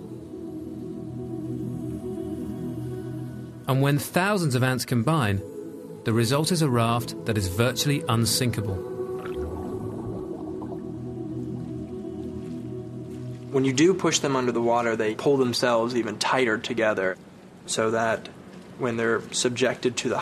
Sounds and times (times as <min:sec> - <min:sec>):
Music: 0:00.0 - 0:15.9
Speech: 0:03.7 - 0:05.5, 0:06.1 - 0:08.8, 0:13.5 - 0:20.2.